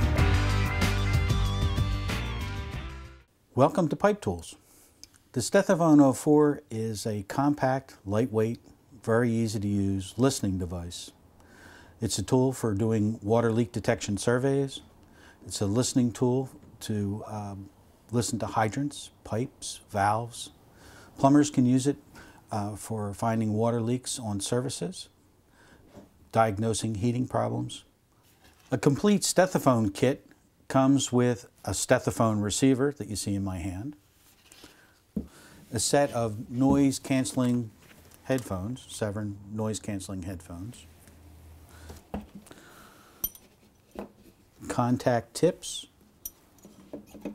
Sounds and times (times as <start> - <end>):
Speech: 3.5 - 4.6, 5.3 - 11.2, 12.0 - 20.6, 21.2 - 25.2, 26.3 - 27.9, 28.7 - 34.0, 35.7 - 40.9, 44.6 - 46.0.